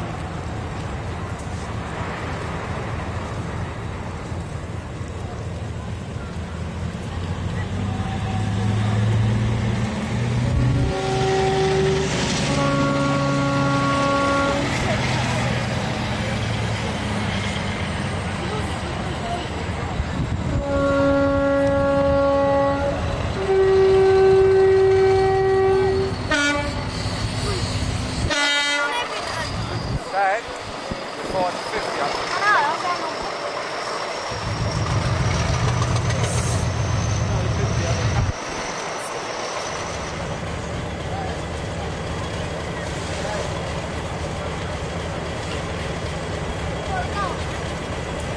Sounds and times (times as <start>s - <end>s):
Railroad car, train wagon: 0.0s - 48.3s
Train horn: 10.5s - 14.9s, 20.5s - 27.0s, 28.2s - 29.1s
Steam whistle: 10.8s - 14.7s, 20.6s - 27.6s.